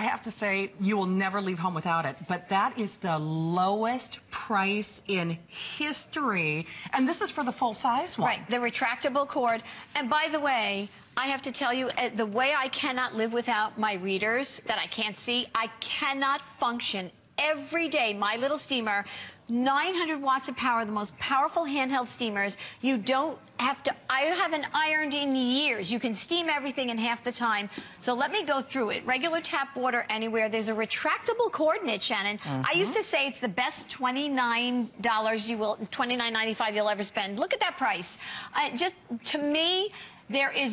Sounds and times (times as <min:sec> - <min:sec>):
Speech: 0:00.0 - 0:40.7.